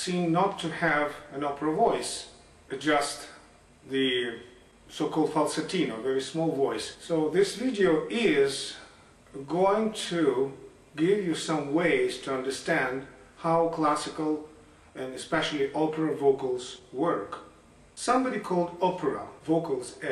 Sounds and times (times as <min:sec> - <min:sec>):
Speech: 0:00.0 - 0:20.1.